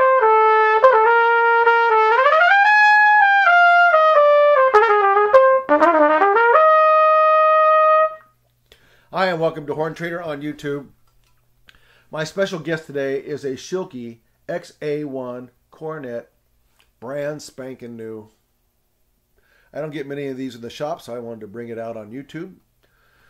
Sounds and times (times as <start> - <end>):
Trumpet: 0.0 - 8.3
Speech: 9.1 - 10.9, 12.1 - 16.3, 17.0 - 18.4, 19.7 - 22.6.